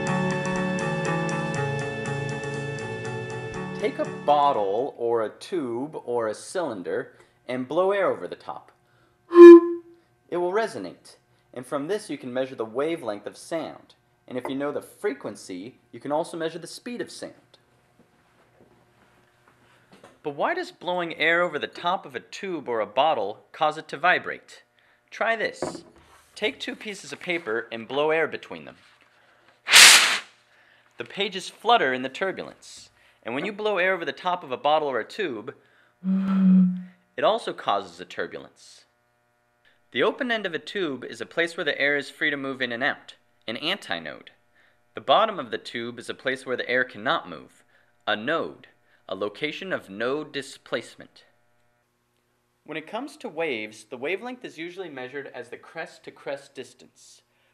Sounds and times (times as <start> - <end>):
Music: 0.0 - 4.4
Speech: 3.8 - 8.8, 10.3 - 17.7, 20.2 - 28.9, 31.0 - 38.9, 39.9 - 44.4, 45.0 - 51.3, 52.6 - 57.3.